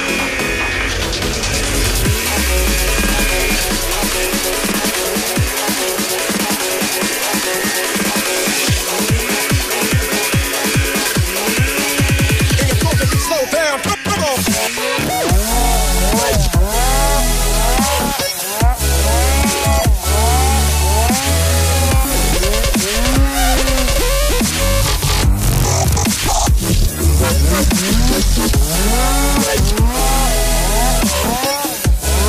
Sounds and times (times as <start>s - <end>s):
Drum and bass: 0.0s - 32.2s.